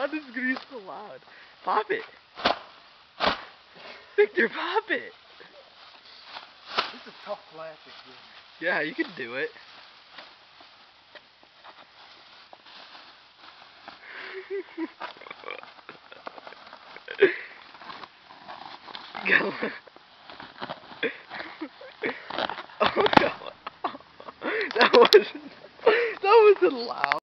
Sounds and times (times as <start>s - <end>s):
Speech: 7.2s - 9.6s, 26.2s - 27.2s.